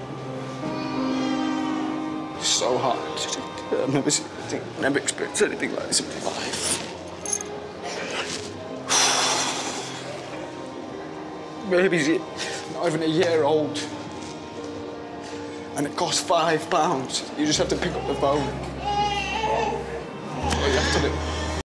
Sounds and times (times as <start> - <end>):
Music: 0.0 - 21.6
Baby cry, infant cry: 17.8 - 19.9.